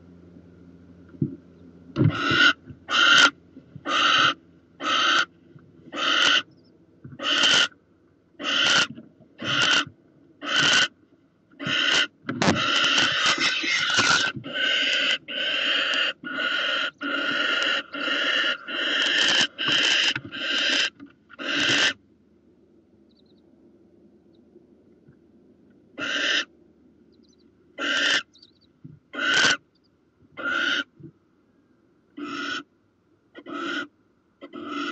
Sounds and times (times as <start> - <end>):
Owl: 2.0 - 5.3, 5.9 - 7.8, 8.4 - 11.0, 11.6 - 22.0, 23.1 - 23.4, 26.0 - 26.5, 27.1 - 29.7, 30.4 - 31.0, 32.2 - 32.7, 33.3 - 34.9.